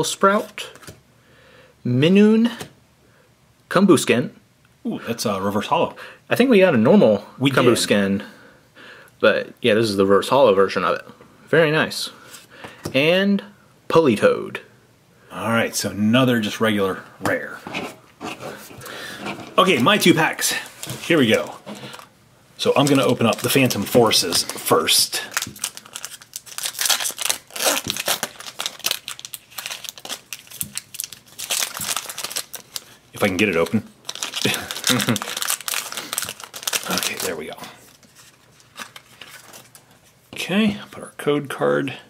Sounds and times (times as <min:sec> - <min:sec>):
Speech: 0:03.7 - 0:08.3, 0:19.6 - 0:21.6, 0:22.6 - 0:25.3, 0:40.4 - 0:42.1.